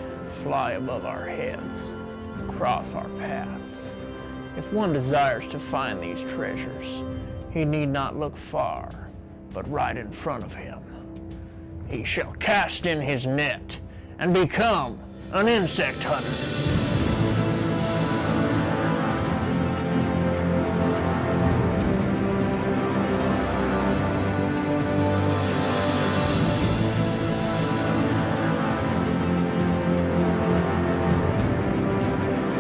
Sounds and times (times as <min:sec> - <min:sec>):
Music: 0:00.0 - 0:32.6.